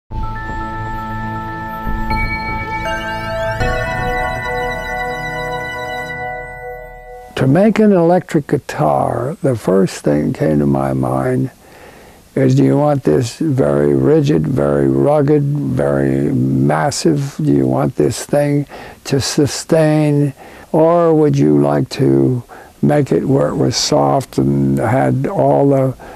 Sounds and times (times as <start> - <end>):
Musical instrument: 0.1 - 8.0
Speech: 7.4 - 11.6, 12.4 - 26.0.